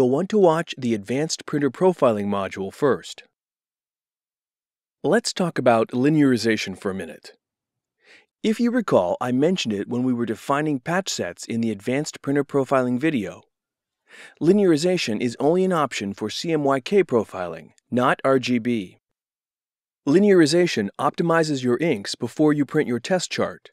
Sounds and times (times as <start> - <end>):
Speech: 0.0 - 3.3, 5.0 - 7.4, 8.4 - 13.5, 14.3 - 19.0, 20.1 - 23.7.